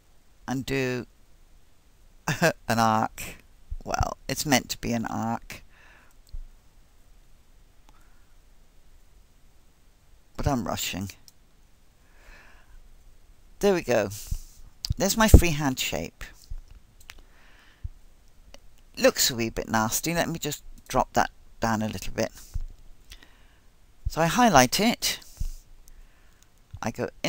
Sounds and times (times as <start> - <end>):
Speech: 0.5 - 1.1, 2.3 - 5.6, 10.4 - 11.2, 13.6 - 16.4, 19.0 - 22.4, 24.1 - 25.4, 26.8 - 27.2.